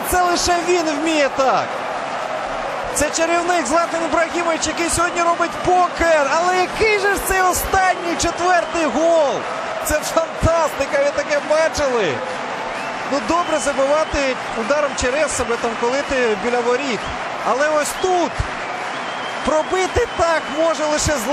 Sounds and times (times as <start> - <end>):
Speech: 0.0 - 1.7, 3.0 - 12.2, 13.1 - 18.4, 19.4 - 21.3.